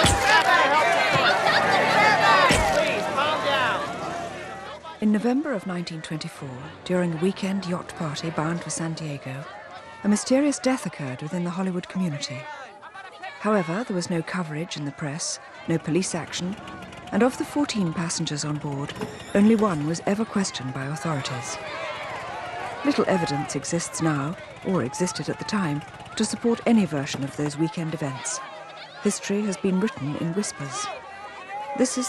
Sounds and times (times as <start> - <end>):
Speech: 4.6 - 21.7, 22.8 - 28.4, 29.0 - 31.0, 31.8 - 32.0.